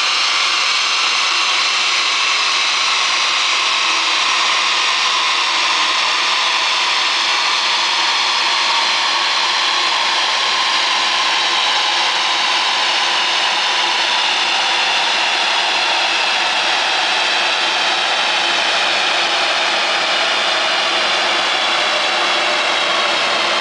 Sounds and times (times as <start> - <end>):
Engine: 0.0 - 23.6.